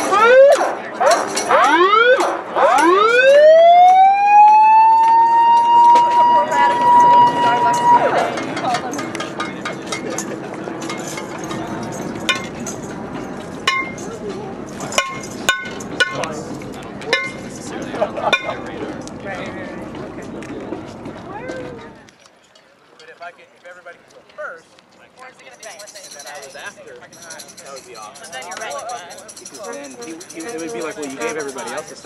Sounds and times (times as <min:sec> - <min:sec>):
Speech: 0:16.0 - 0:22.1, 0:22.8 - 0:32.0.